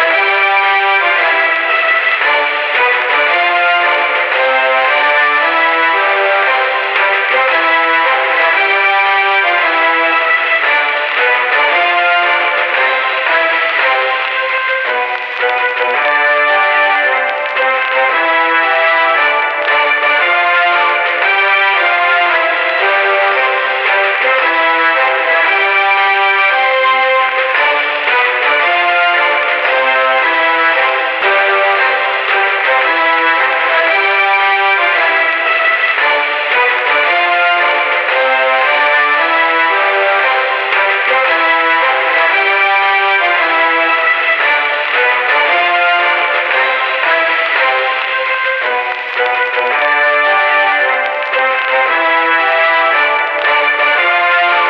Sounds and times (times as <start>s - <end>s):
Music: 0.0s - 54.6s.